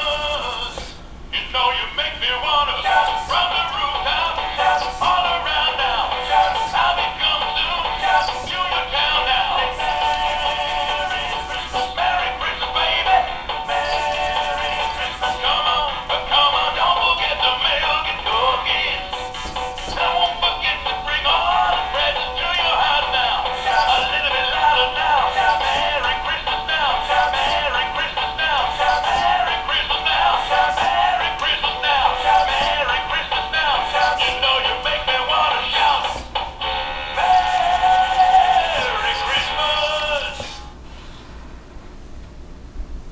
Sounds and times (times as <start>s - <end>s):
Male singing: 0.0s - 36.3s, 37.2s - 40.6s
Music: 0.0s - 40.7s.